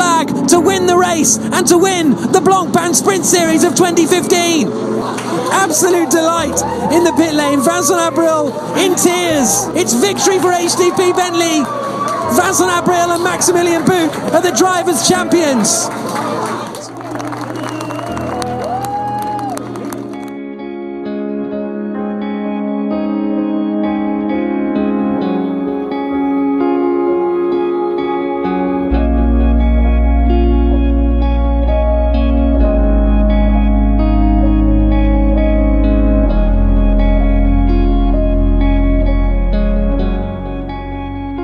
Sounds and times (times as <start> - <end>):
Music: 0.0 - 41.4
Effects unit: 16.9 - 41.4.